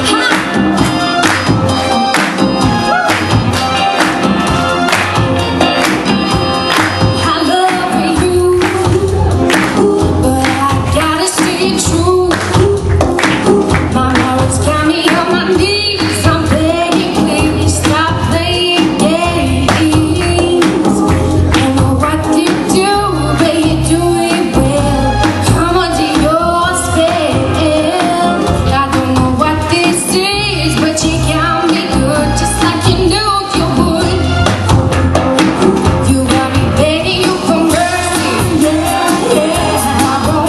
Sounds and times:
Music: 0:00.0 - 0:40.4
Female singing: 0:07.2 - 0:34.4, 0:36.0 - 0:40.4.

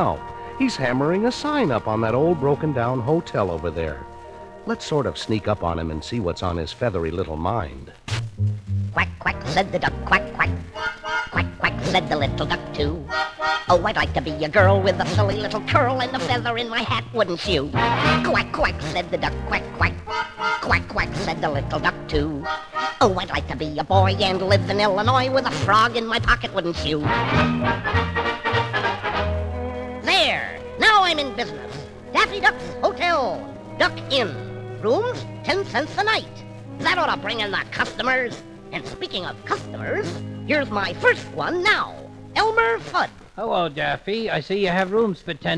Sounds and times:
Music: 0:00.0 - 0:45.5.

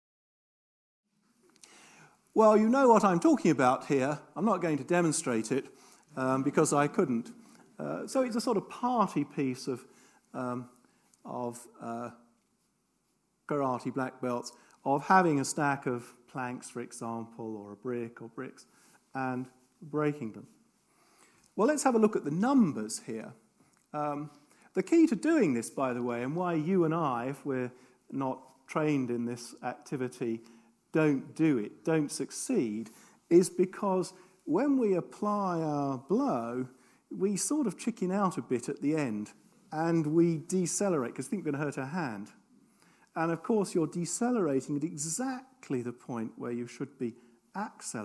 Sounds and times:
Speech: 0:02.4 - 0:12.2, 0:13.5 - 0:20.6, 0:21.6 - 0:42.4, 0:43.1 - 0:48.0.

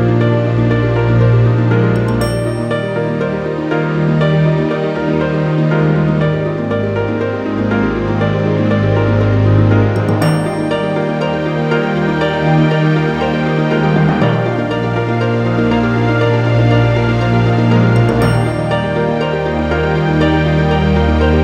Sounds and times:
Background music: 0:00.0 - 0:21.4.

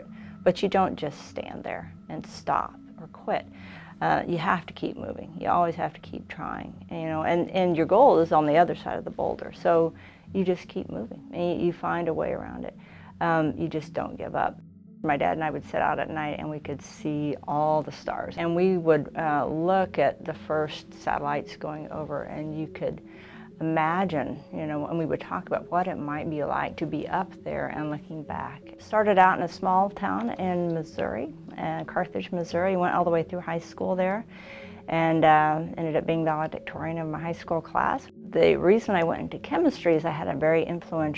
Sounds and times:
Speech: 0:00.0 - 0:23.0, 0:23.6 - 0:34.3, 0:34.9 - 0:41.1
Inside, small room: 0:00.0 - 0:41.1.

